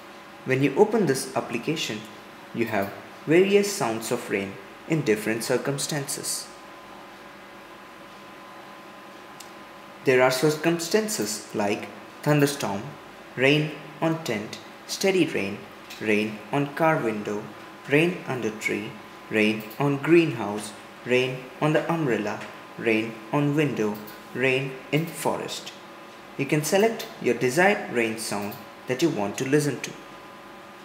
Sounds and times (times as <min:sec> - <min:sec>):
Speech: 0:00.5 - 0:06.6, 0:10.0 - 0:25.8, 0:26.4 - 0:30.0.